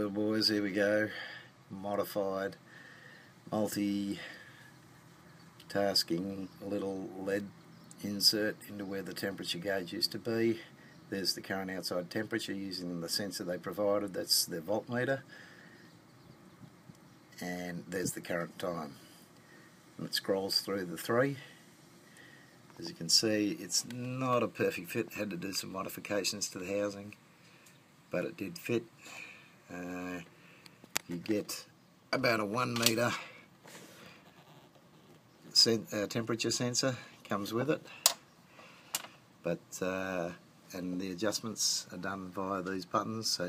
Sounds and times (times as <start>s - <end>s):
Speech: 0.0s - 2.6s, 3.5s - 4.4s, 5.7s - 15.3s, 17.4s - 19.0s, 20.0s - 21.6s, 22.8s - 27.2s, 28.1s - 28.9s, 29.7s - 30.3s, 31.0s - 33.3s, 35.5s - 37.9s, 39.4s - 43.4s.